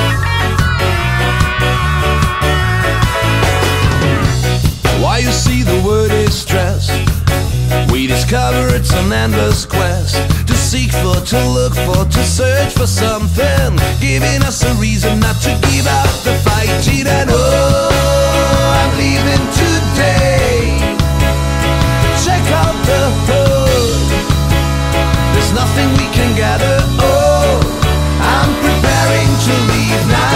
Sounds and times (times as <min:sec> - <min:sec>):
Music: 0:00.0 - 0:30.3.